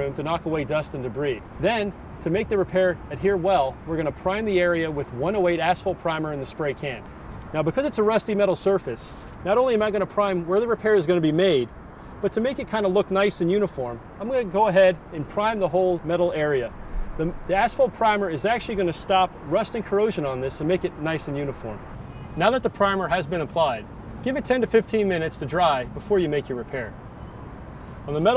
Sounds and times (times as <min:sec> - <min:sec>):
Speech: 0:00.0 - 0:21.8, 0:22.4 - 0:27.0, 0:28.1 - 0:28.3.